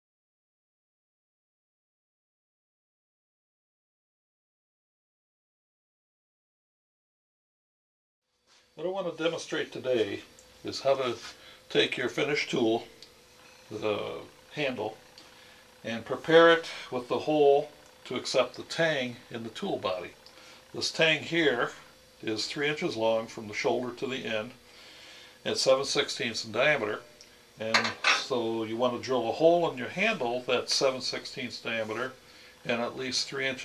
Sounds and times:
Speech: 8.8s - 12.9s, 13.7s - 15.0s, 15.8s - 24.6s, 25.4s - 33.6s.

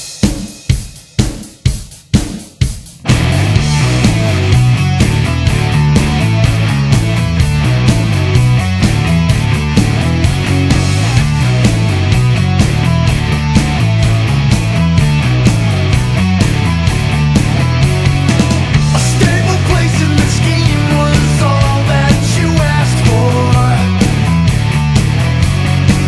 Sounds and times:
Music: 0.0s - 26.0s.

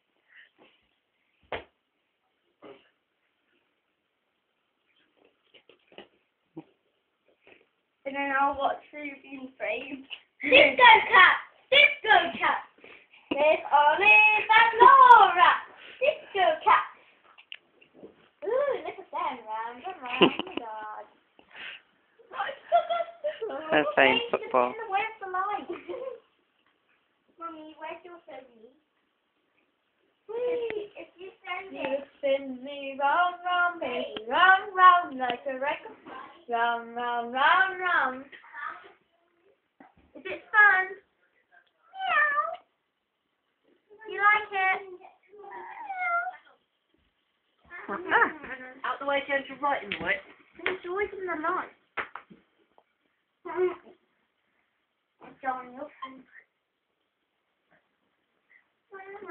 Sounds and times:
Cat: 41.9s - 42.7s, 45.5s - 46.6s.

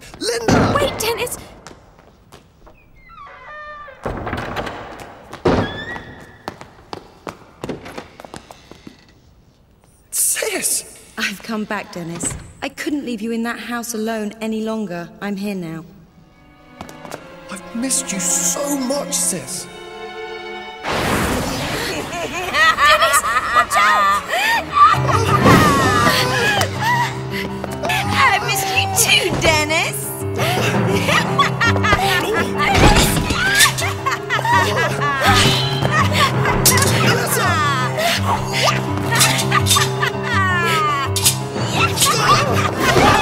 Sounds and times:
Music: 14.3s - 43.2s.

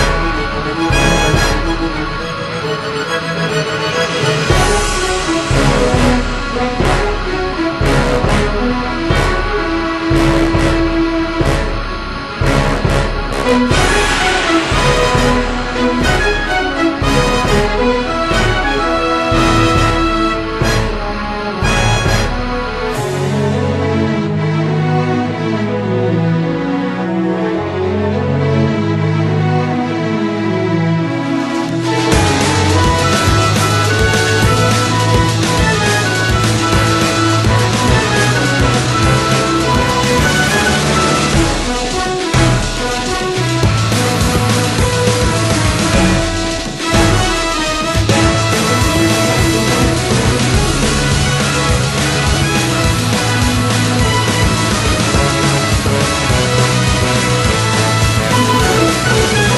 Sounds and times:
Rhythm and blues: 3.5s - 23.0s, 31.7s - 59.5s.

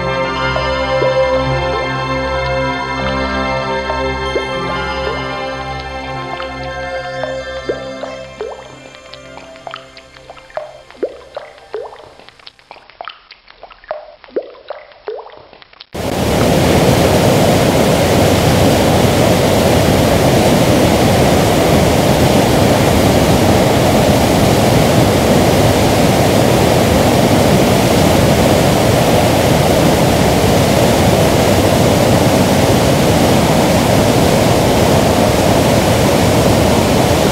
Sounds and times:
Music: 0.0s - 12.2s
Waterfall: 0.0s - 12.6s, 16.0s - 37.3s.

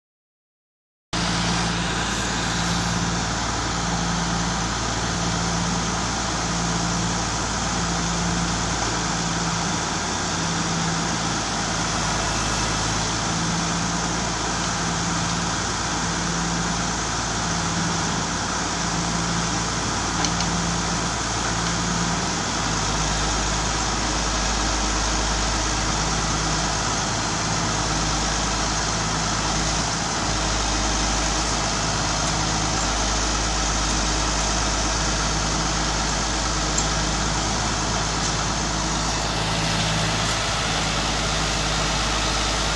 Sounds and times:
Truck: 1.2s - 42.7s.

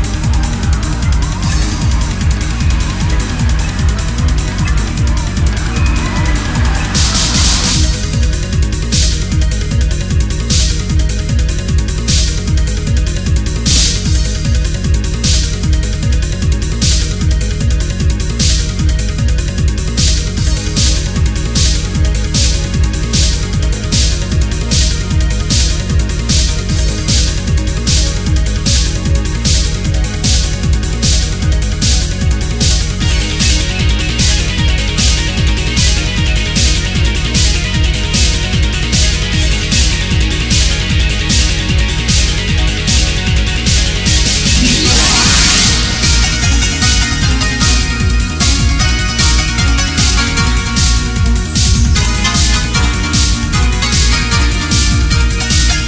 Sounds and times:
Techno: 0.0s - 55.8s.

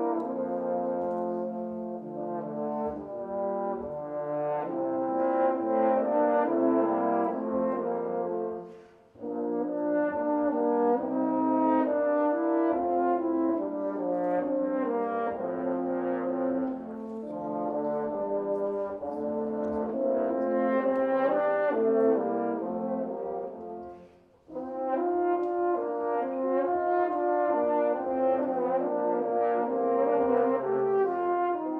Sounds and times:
French horn: 0.0s - 31.7s.

